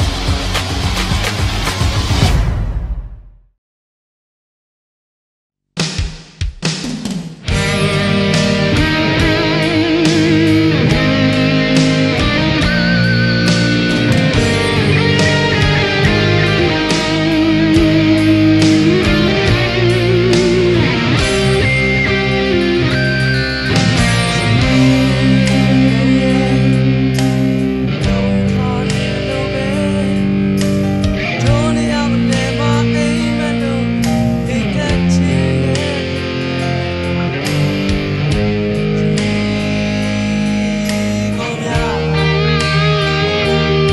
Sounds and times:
Bass guitar: 0.0s - 3.1s, 7.3s - 43.9s.

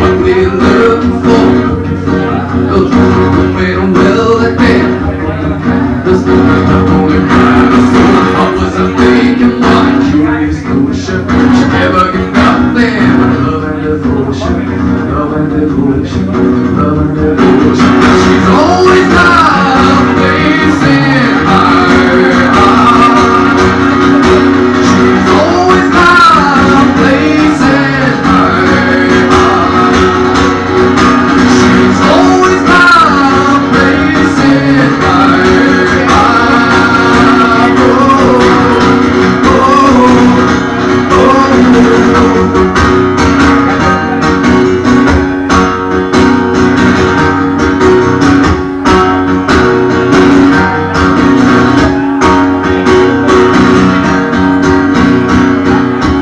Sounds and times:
Singing: 0.0s - 24.2s, 24.8s - 30.8s, 31.5s - 42.8s
Music: 0.0s - 56.2s.

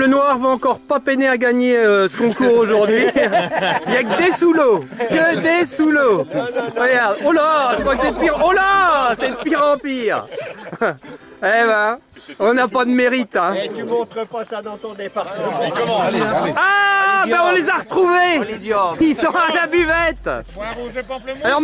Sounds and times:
Music: 0.0s - 16.6s, 17.4s - 21.6s
Speech: 3.9s - 10.3s, 11.4s - 21.6s.

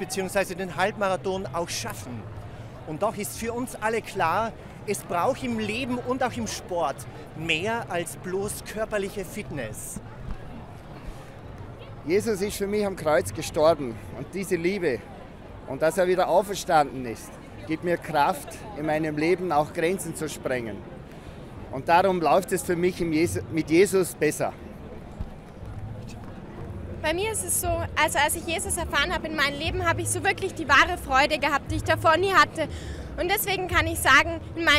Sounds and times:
Outside, urban or manmade: 0.0s - 34.7s.

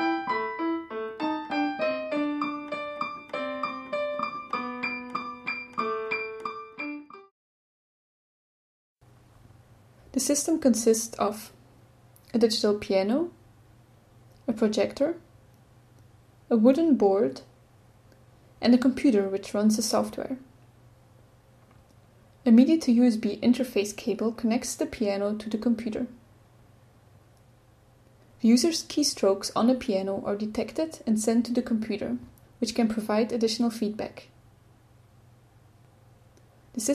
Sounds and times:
Music: 0.0s - 7.3s
Speech: 10.1s - 11.6s, 12.2s - 13.4s, 14.4s - 15.3s, 16.5s - 17.6s, 18.6s - 20.5s, 22.4s - 26.2s, 28.4s - 34.4s.

